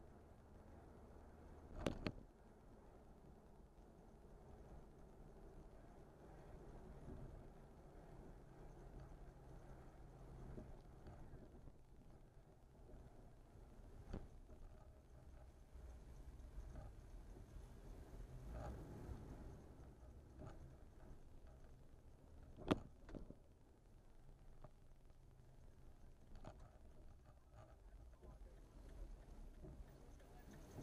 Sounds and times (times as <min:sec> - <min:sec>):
Car: 0:00.0 - 0:30.8.